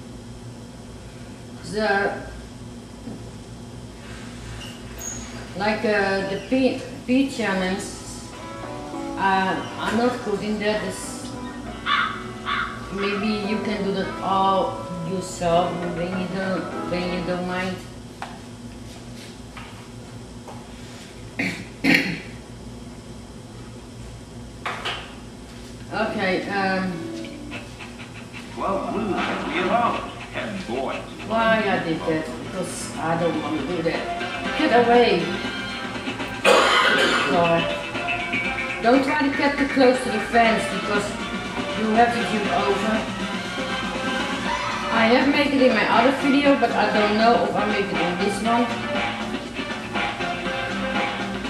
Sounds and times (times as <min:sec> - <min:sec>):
Speech: 0:01.6 - 0:02.3, 0:05.6 - 0:08.2, 0:45.0 - 0:48.7
Music: 0:07.3 - 0:17.9, 0:26.0 - 0:51.4.